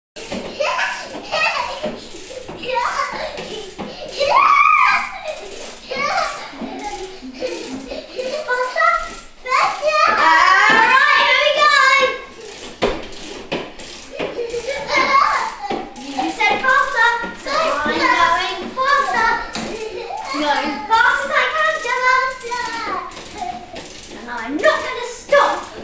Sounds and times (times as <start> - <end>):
Child speech, kid speaking: 8.2 - 12.3, 14.7 - 25.8.